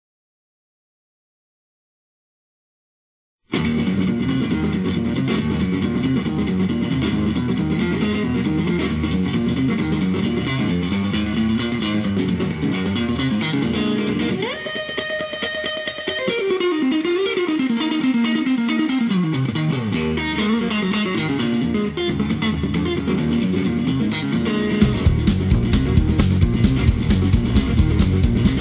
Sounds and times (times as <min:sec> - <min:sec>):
Electric guitar: 0:03.5 - 0:28.6
Tapping (guitar technique): 0:03.5 - 0:28.6.